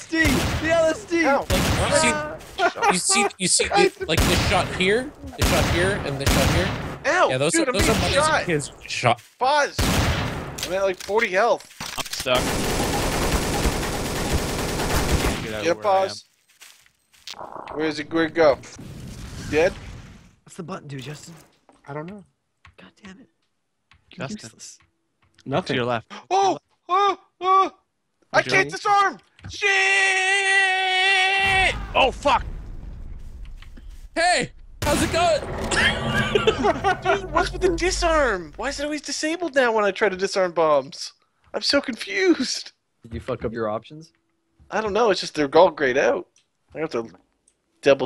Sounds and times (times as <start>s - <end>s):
Screaming: 29.6s - 32.0s.